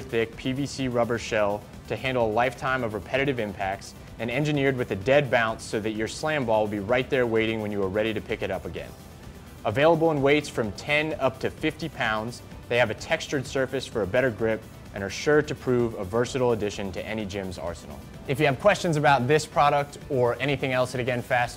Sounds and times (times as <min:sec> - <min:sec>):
Speech: 0:00.0 - 0:08.9, 0:09.6 - 0:21.5
Music: 0:00.0 - 0:21.5.